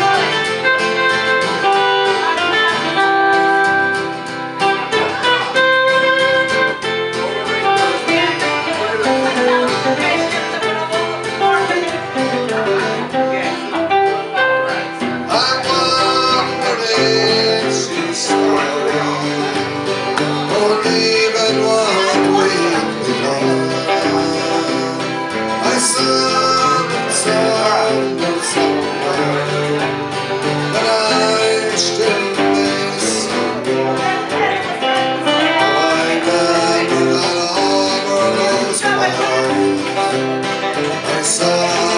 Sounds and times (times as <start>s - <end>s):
Blues: 0.0s - 41.9s
Inside, large room or hall: 0.0s - 41.9s
Speech: 4.6s - 41.9s.